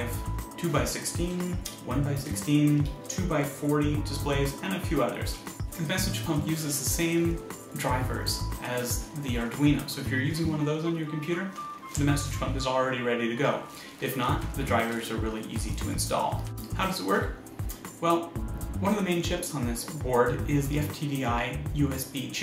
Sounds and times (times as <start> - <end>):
Speech: 0.0 - 17.4, 18.0 - 22.4
Music: 0.0 - 22.4.